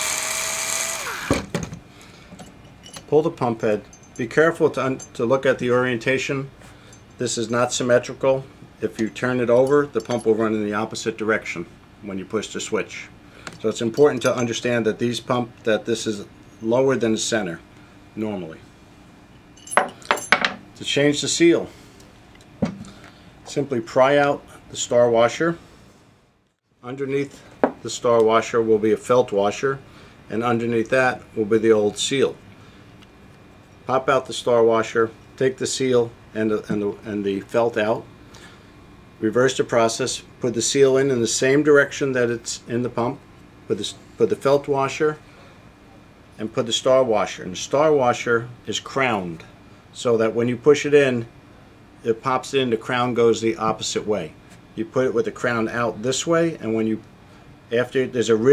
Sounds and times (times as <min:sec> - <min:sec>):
Speech: 0:03.1 - 0:06.5, 0:07.2 - 0:17.6, 0:18.2 - 0:18.6, 0:20.8 - 0:21.7, 0:23.5 - 0:25.6, 0:26.8 - 0:32.4, 0:33.9 - 0:38.1, 0:39.2 - 0:45.2, 0:46.4 - 0:51.3, 0:52.0 - 0:57.1, 0:57.7 - 0:58.5.